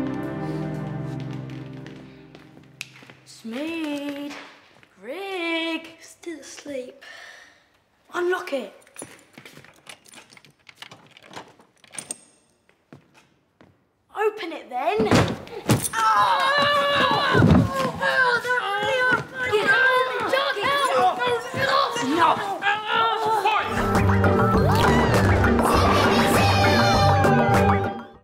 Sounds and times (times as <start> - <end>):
Music: 0.0 - 3.1, 23.7 - 28.2.